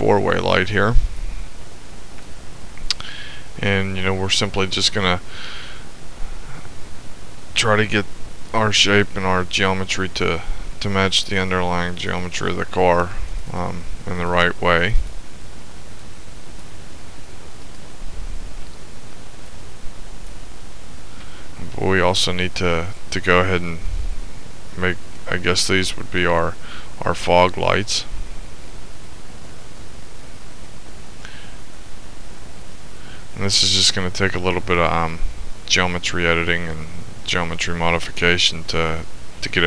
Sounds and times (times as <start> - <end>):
Speech: 0.0 - 1.0, 3.6 - 5.2, 7.6 - 15.0, 21.6 - 23.8, 24.8 - 28.1, 33.4 - 39.6.